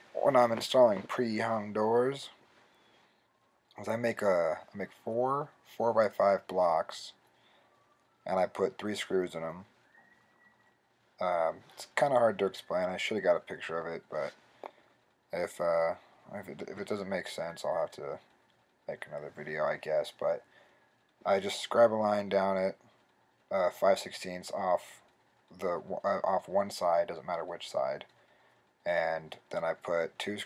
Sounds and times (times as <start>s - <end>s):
Speech: 0.1s - 2.4s, 3.8s - 7.2s, 8.3s - 9.7s, 11.2s - 14.4s, 15.3s - 18.2s, 18.9s - 20.5s, 21.2s - 22.8s, 23.5s - 28.1s, 28.8s - 30.4s.